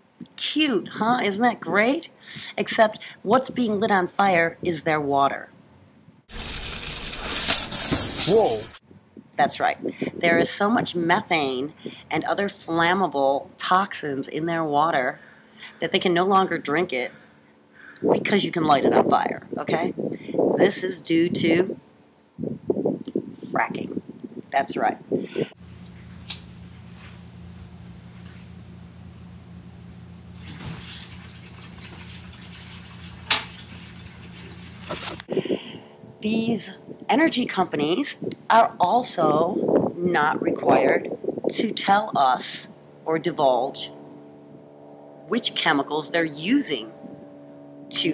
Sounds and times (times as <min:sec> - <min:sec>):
Outside, rural or natural: 0:00.0 - 0:48.1
Speech: 0:00.4 - 0:05.5, 0:08.2 - 0:08.7, 0:09.4 - 0:17.2, 0:18.0 - 0:20.0, 0:20.6 - 0:21.8, 0:23.4 - 0:25.0, 0:36.2 - 0:43.9, 0:45.3 - 0:46.9, 0:47.9 - 0:48.1.